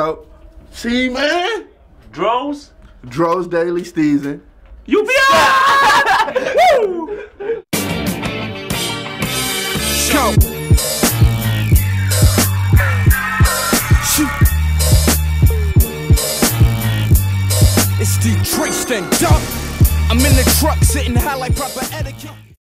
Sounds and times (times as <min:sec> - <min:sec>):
Music: 0:07.7 - 0:22.6.